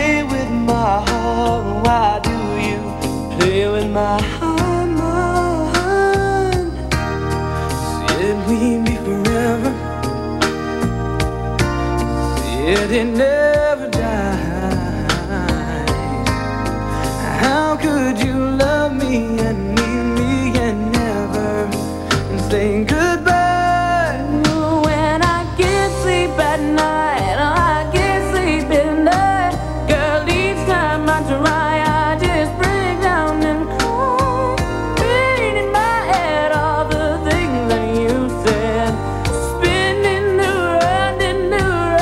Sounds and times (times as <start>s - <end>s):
Music: 0.0s - 42.0s.